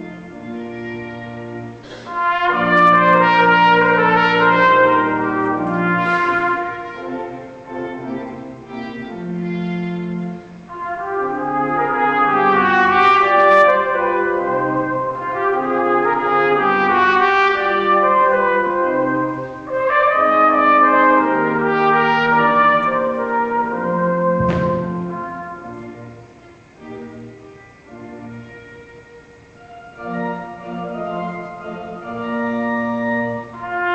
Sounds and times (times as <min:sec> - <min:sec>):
Music: 0:00.0 - 0:33.9.